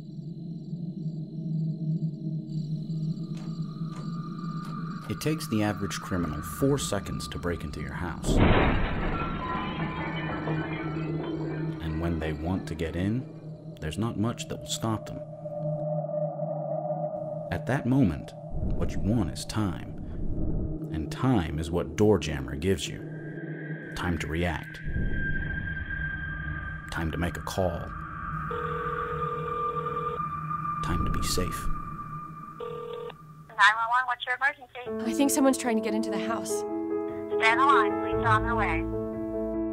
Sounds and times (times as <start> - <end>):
Music: 0.0 - 15.8, 34.8 - 39.7
Speech: 5.1 - 8.4, 11.8 - 15.2, 17.5 - 19.9, 30.8 - 31.7, 37.4 - 38.9.